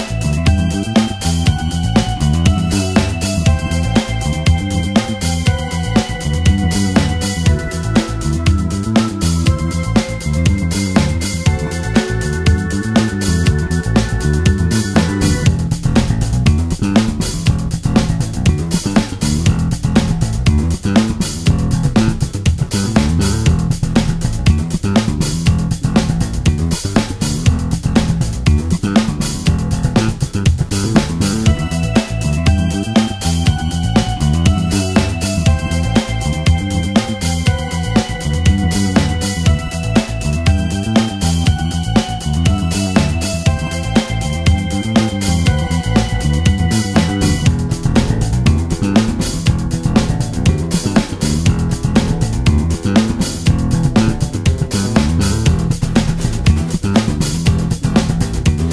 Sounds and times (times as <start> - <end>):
Music: 0.0 - 58.7.